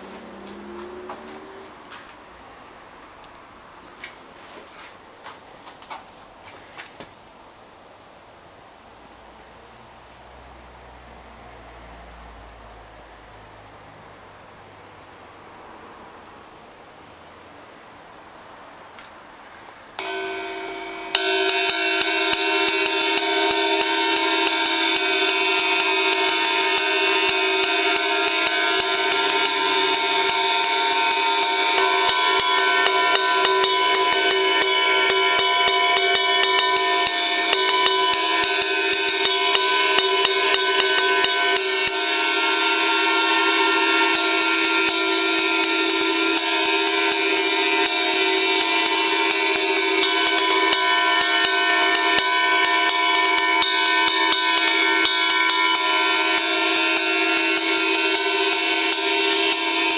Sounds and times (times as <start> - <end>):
Music: 20.0 - 59.9.